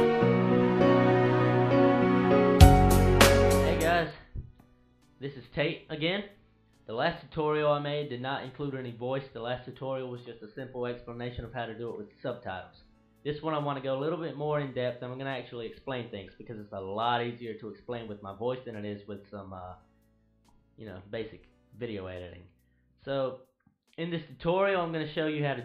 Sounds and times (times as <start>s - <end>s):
Speech: 3.6s - 4.3s, 5.2s - 6.3s, 6.9s - 19.8s, 20.8s - 23.4s, 24.0s - 25.6s.